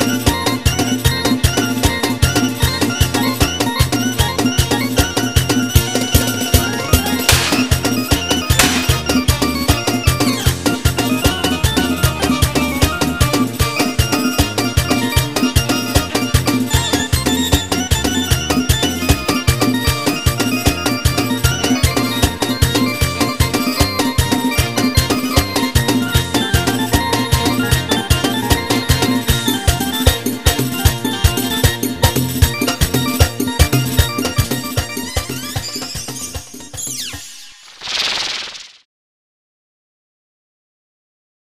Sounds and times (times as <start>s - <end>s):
Music: 0.0s - 37.6s.